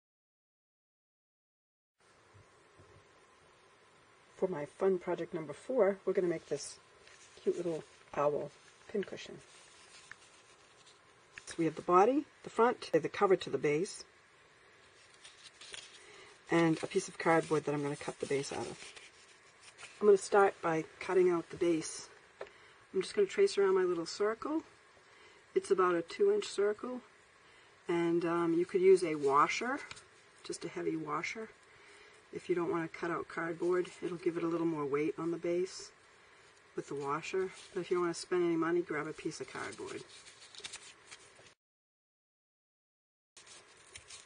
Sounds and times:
Speech: 4.4 - 6.8, 7.4 - 9.5, 11.4 - 14.1, 16.5 - 18.9, 20.0 - 22.2, 22.9 - 24.7, 25.6 - 27.1, 27.9 - 31.6, 32.3 - 36.0, 36.8 - 40.1.

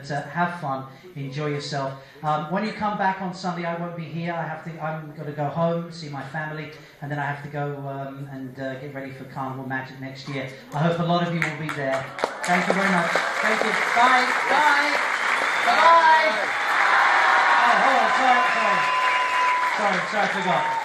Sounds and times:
Male speech, man speaking: 0.0 - 15.0, 15.6 - 16.4, 17.6 - 18.9, 19.7 - 20.7
Narration, monologue: 0.0 - 16.4.

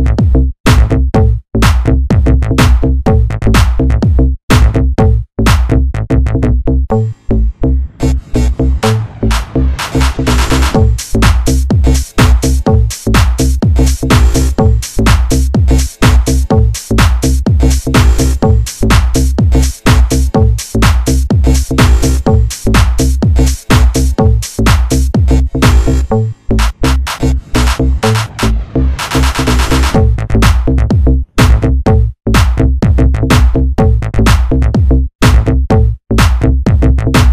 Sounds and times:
House music: 0.0 - 5.8, 6.9 - 37.3.

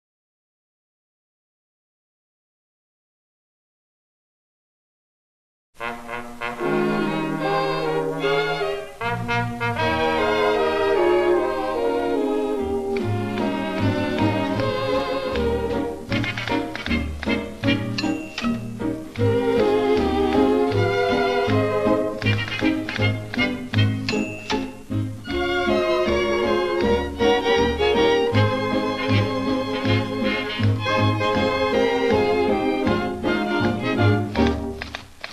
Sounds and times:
Orchestra: 5.8 - 35.3.

